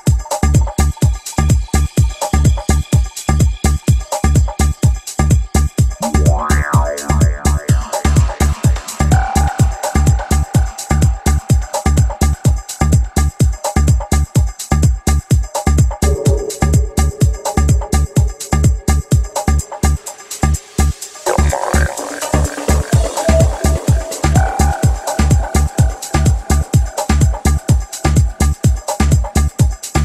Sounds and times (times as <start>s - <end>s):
Music: 0.0s - 30.0s.